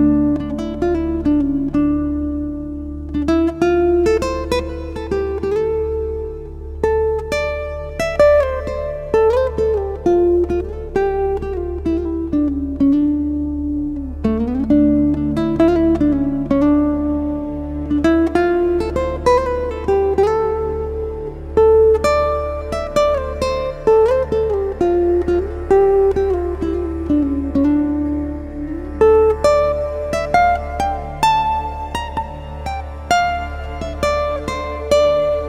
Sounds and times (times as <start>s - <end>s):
Music: 0.0s - 35.4s.